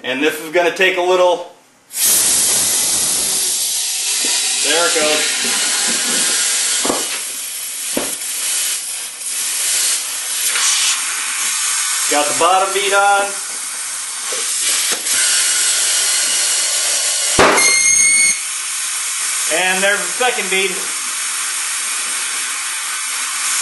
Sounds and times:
Speech: 0.0 - 1.6, 4.6 - 5.3, 12.1 - 13.4, 19.5 - 21.0.

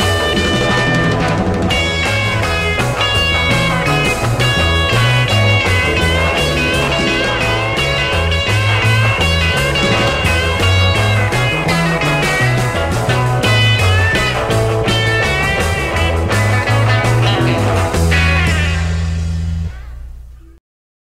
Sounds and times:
Music: 0.0 - 20.6.

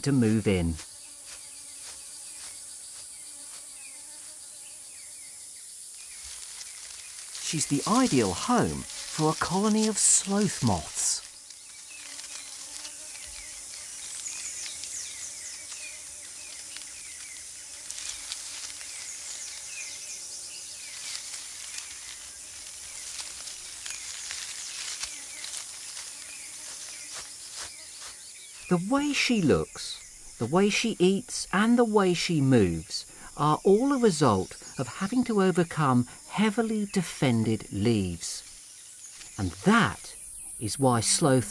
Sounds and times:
Speech: 0.0 - 0.8, 7.4 - 11.2, 28.7 - 38.5, 39.4 - 41.5.

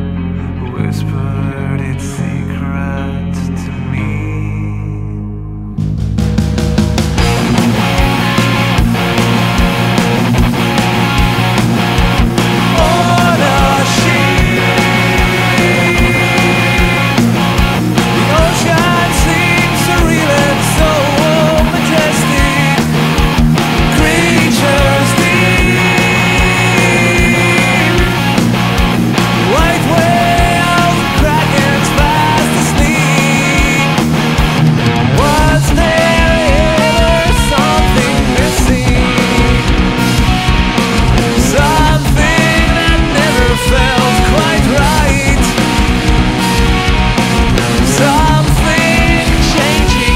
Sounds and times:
Progressive rock: 0.0 - 50.1.

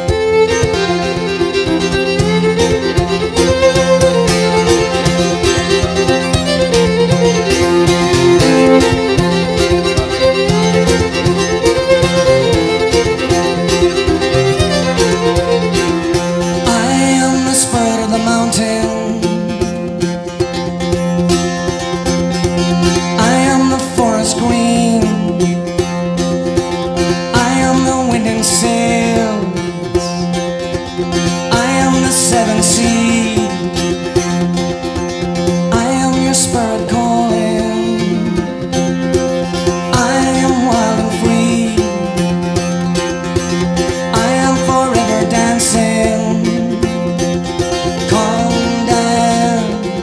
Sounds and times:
Independent music: 0.0 - 50.0.

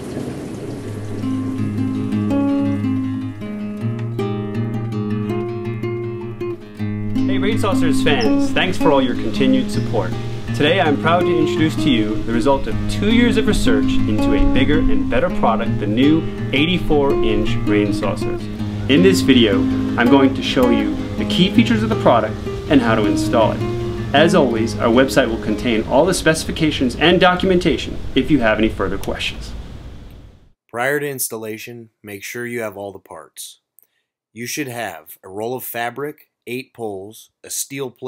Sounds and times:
Music: 1.2 - 28.3
Speech: 7.3 - 23.6, 24.2 - 29.6, 30.7 - 33.6, 34.4 - 38.0.

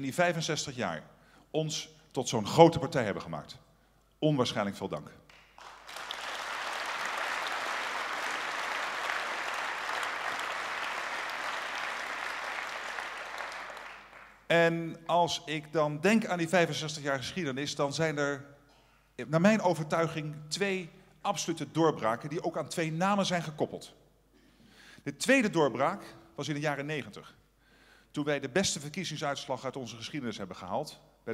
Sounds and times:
Male speech, man speaking: 0.0 - 1.0, 1.6 - 3.6, 4.2 - 5.2, 14.5 - 18.4, 19.2 - 24.0, 25.1 - 27.4, 28.2 - 31.3
Narration, monologue: 0.0 - 5.5, 14.3 - 31.3.

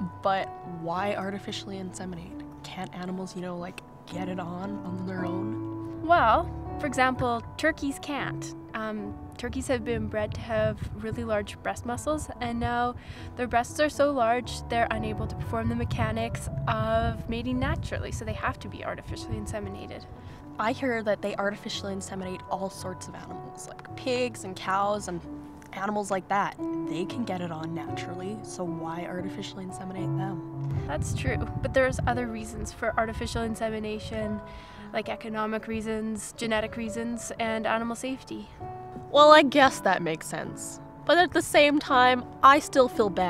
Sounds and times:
Speech: 0.0 - 20.0, 20.6 - 34.4
Music: 0.0 - 43.2.

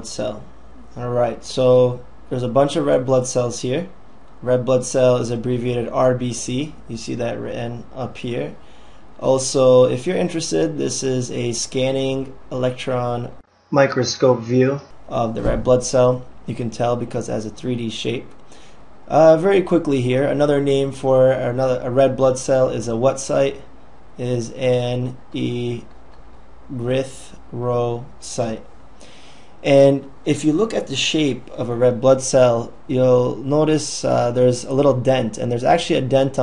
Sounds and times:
Speech: 0.0 - 8.6, 9.2 - 18.3, 19.1 - 25.9, 26.7 - 28.7, 29.6 - 36.4.

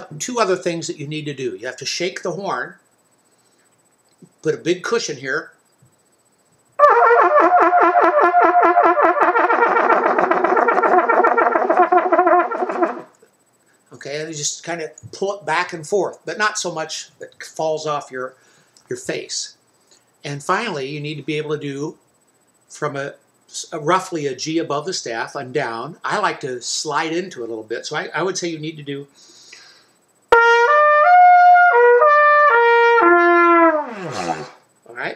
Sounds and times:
Trumpet: 6.8 - 13.2, 30.3 - 34.6.

